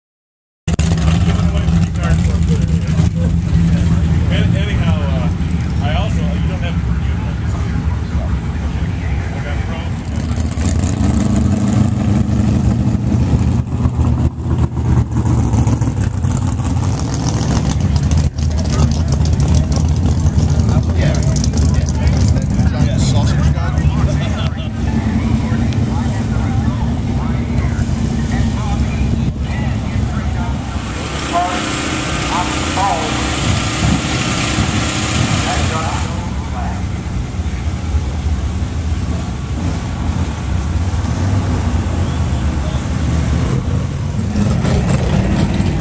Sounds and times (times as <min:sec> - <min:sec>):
Car: 0:00.7 - 0:45.8
Speech: 0:01.2 - 0:10.4, 0:17.7 - 0:33.4, 0:35.4 - 0:38.2.